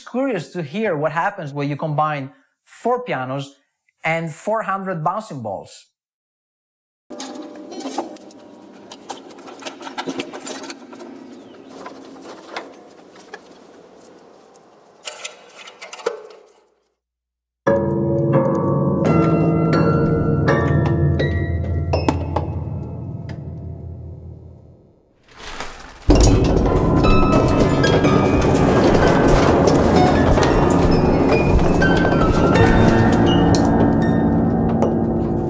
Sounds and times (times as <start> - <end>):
Music: 17.7 - 25.0, 26.2 - 35.4.